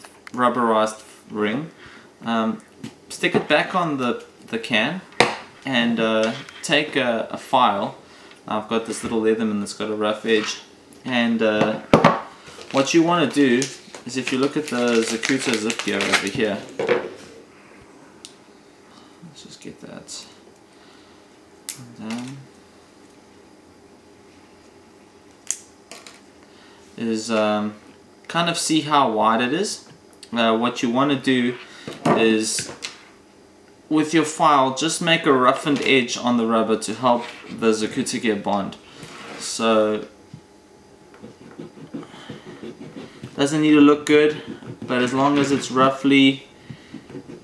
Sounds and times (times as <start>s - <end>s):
Speech: 0.3s - 5.0s, 5.7s - 11.8s, 12.8s - 16.7s, 19.3s - 20.4s, 21.8s - 22.5s, 27.0s - 32.8s, 33.9s - 38.8s, 39.4s - 40.2s, 43.4s - 46.5s.